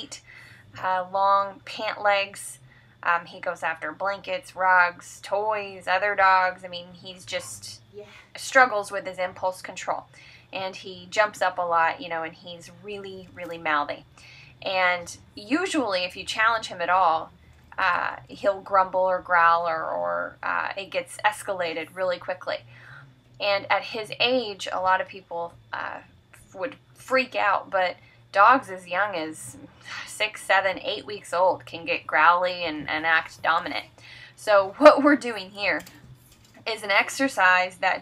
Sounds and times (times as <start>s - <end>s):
Speech: 0.8s - 22.6s, 23.4s - 36.0s, 36.7s - 38.0s.